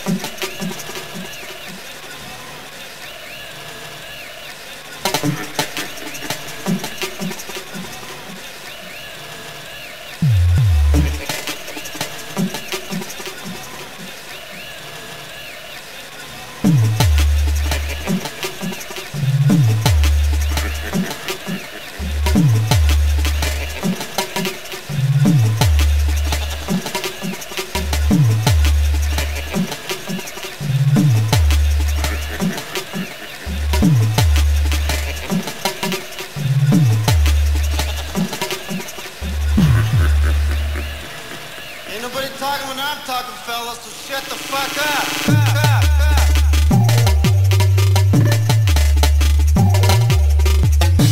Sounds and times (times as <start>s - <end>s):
Background music: 10.0s - 14.8s, 16.6s - 42.4s, 43.8s - 51.1s.